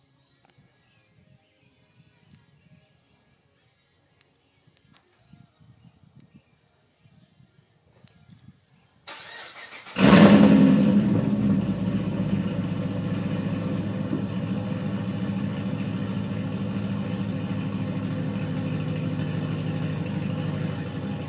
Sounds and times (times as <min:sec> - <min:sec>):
Car: 0:09.1 - 0:21.2.